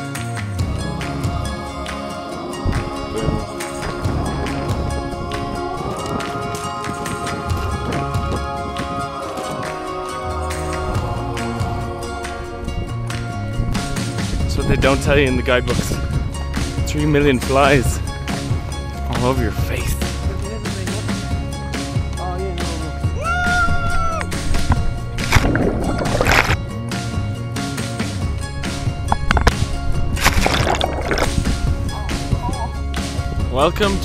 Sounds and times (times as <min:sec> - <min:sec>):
Music: 0:00.0 - 0:34.0.